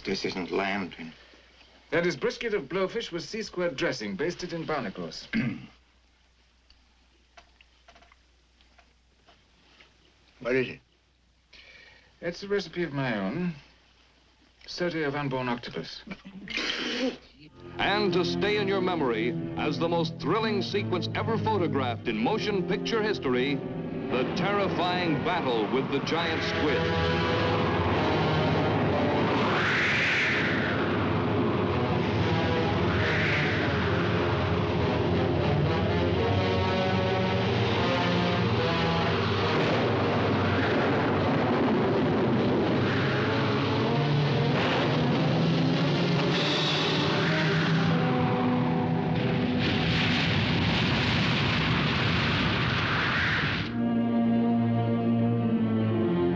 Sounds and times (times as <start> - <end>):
Speech: 0.0 - 1.2, 1.9 - 5.7, 10.4 - 10.8, 12.2 - 13.6, 14.6 - 16.1, 17.4 - 26.9
Music: 17.4 - 41.8, 42.5 - 50.0, 53.7 - 56.3.